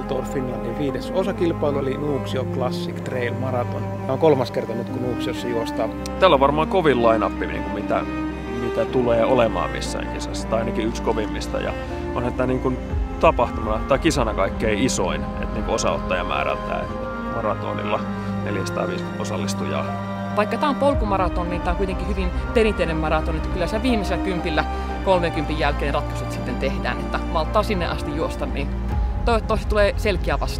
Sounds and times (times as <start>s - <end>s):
Speech: 0.0s - 8.0s, 8.6s - 28.7s, 29.3s - 30.5s
Music: 0.0s - 30.5s.